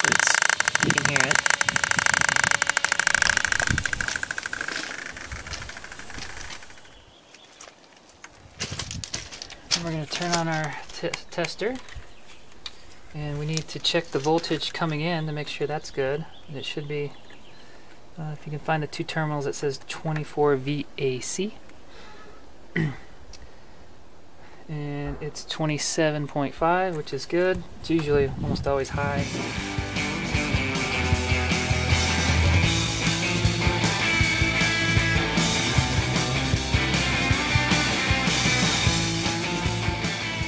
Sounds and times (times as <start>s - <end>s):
Speech: 0.8s - 1.4s, 9.8s - 11.8s, 13.1s - 17.2s, 18.2s - 21.6s, 24.7s - 29.3s.